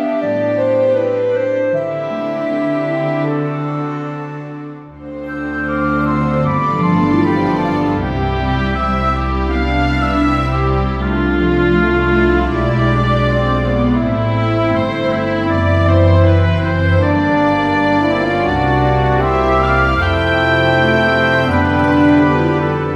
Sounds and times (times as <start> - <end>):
Music: 0.0 - 22.9.